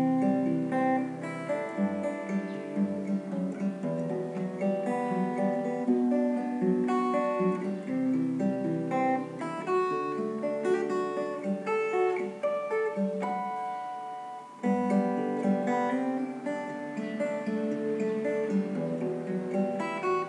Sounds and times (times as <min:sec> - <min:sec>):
Acoustic guitar: 0:00.0 - 0:20.2.